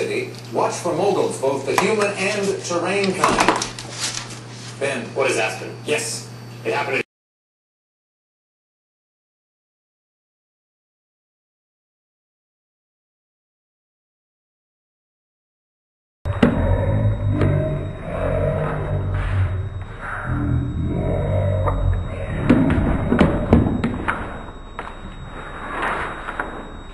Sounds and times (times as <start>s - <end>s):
Speech: 0.0s - 3.5s, 4.8s - 7.1s.